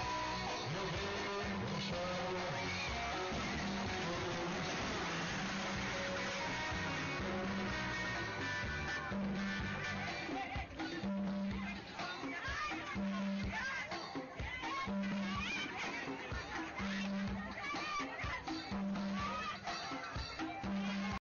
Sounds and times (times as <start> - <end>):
Music: 0.0 - 21.2
Speech: 10.3 - 21.2.